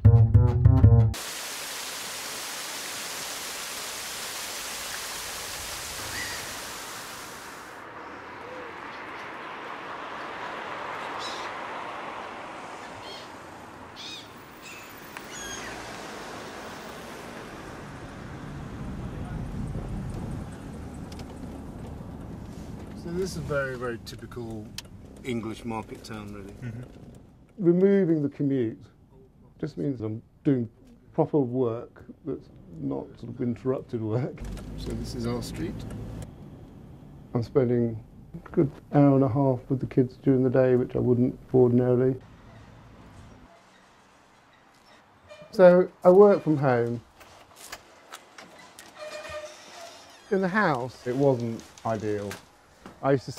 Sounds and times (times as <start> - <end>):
Outside, rural or natural: 1.1 - 28.2, 32.0 - 53.3
Bird: 12.9 - 13.4, 14.0 - 15.8.